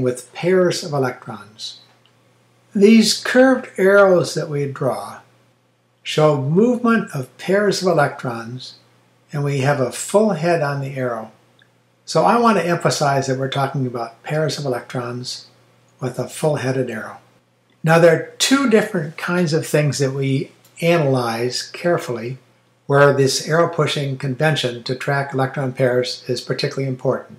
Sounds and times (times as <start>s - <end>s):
Speech: 0.0s - 1.9s, 2.7s - 5.3s, 6.0s - 11.4s, 12.0s - 27.3s.